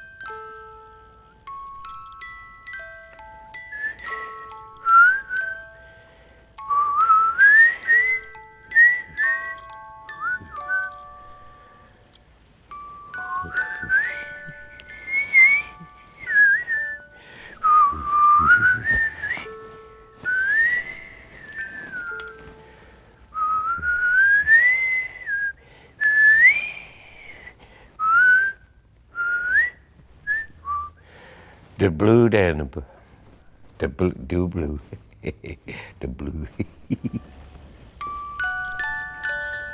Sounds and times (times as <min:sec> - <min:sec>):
Inside, small room: 0:00.0 - 0:39.7
Whistling: 0:03.7 - 0:05.6, 0:06.7 - 0:11.0, 0:13.2 - 0:19.6, 0:20.2 - 0:22.4, 0:23.4 - 0:31.0
Speech: 0:31.8 - 0:32.9, 0:33.8 - 0:35.0, 0:36.0 - 0:36.6.